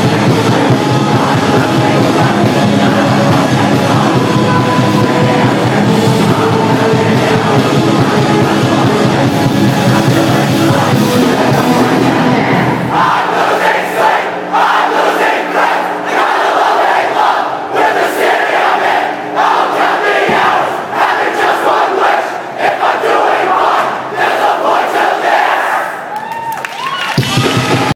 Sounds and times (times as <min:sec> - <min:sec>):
Music: 0:00.0 - 0:26.1, 0:26.7 - 0:27.9.